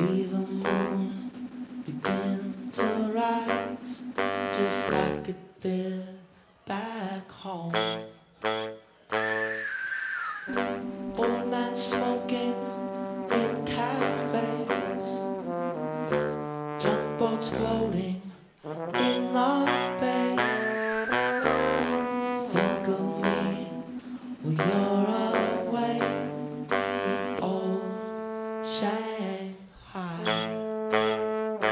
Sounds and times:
Music: 2.1 - 5.2, 10.6 - 28.9, 30.2 - 31.7.

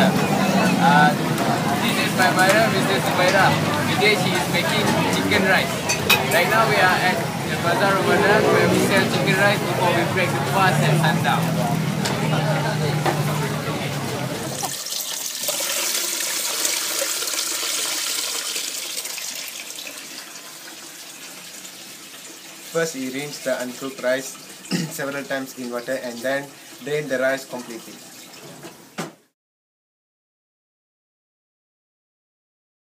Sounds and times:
Speech: 22.7 - 28.0.

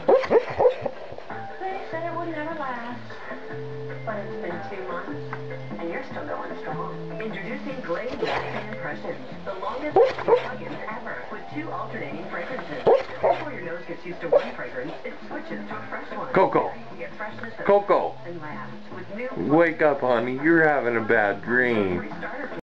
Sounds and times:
Bow-wow: 0.0 - 1.0, 10.0 - 10.6, 12.8 - 13.5
Music: 0.0 - 22.6
Speech: 5.8 - 22.6.

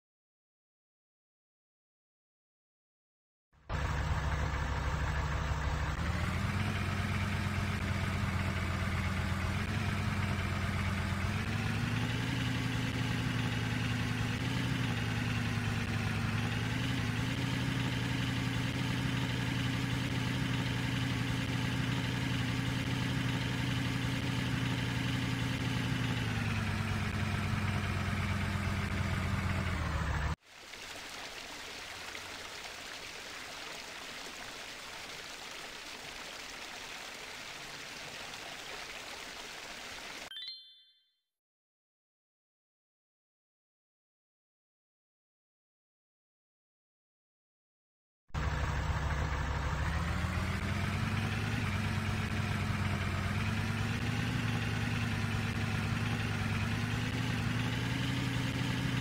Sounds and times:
Truck: 3.6 - 30.4, 31.0 - 40.8, 48.3 - 59.0.

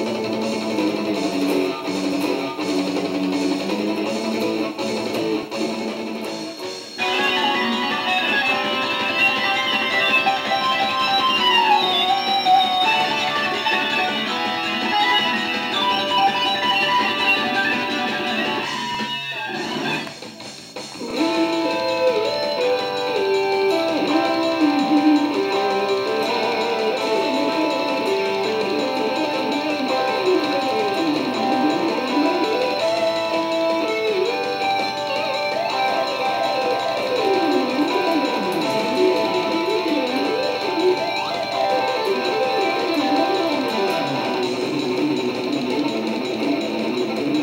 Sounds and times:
Musical instrument: 6.4 - 20.1, 21.0 - 47.4.

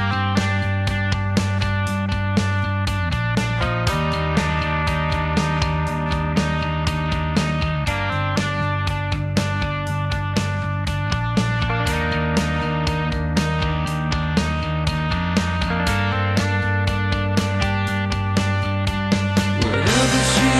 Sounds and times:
Music: 0.0 - 20.5.

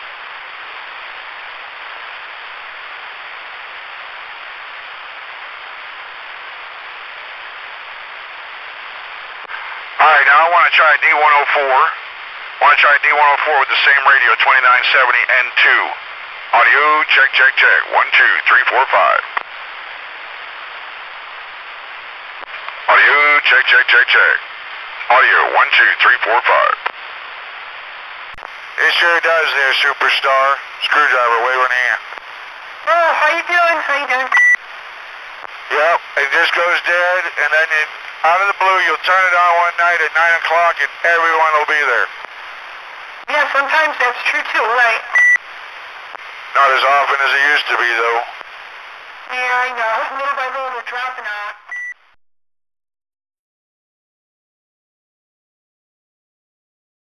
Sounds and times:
Radio: 5.3 - 20.0, 22.3 - 27.3, 28.0 - 51.9
Speech: 10.0 - 12.0, 12.6 - 16.0, 16.6 - 19.2, 22.9 - 24.4, 25.0 - 26.8, 28.8 - 32.0, 32.9 - 34.3, 35.7 - 42.1, 43.3 - 45.1, 46.6 - 48.3, 49.3 - 51.6.

